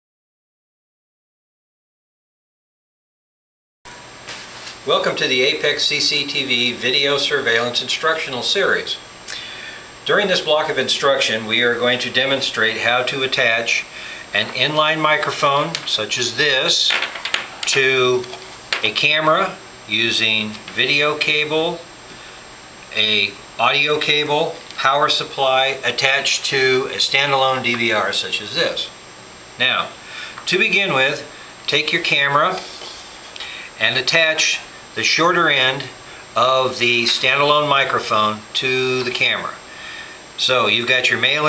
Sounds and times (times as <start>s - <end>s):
Speech: 4.8s - 9.0s, 10.0s - 17.0s, 17.6s - 21.9s, 22.9s - 29.0s, 29.6s - 33.0s, 33.8s - 39.6s, 40.4s - 41.4s.